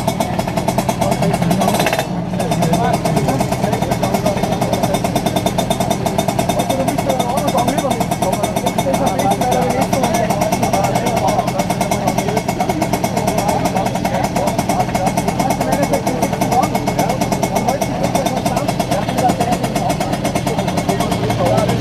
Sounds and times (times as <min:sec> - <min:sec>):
Speech: 0:00.0 - 0:21.8.